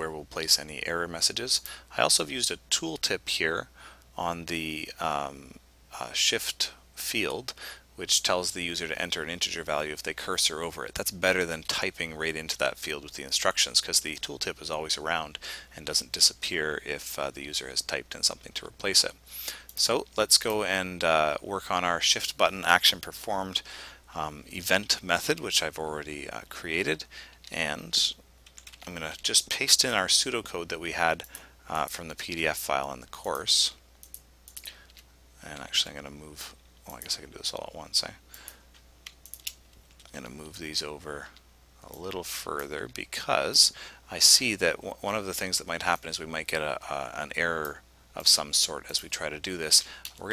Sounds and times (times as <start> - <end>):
Speech: 0.0 - 19.2, 19.8 - 28.2, 28.8 - 33.8, 35.4 - 38.2, 40.1 - 50.3.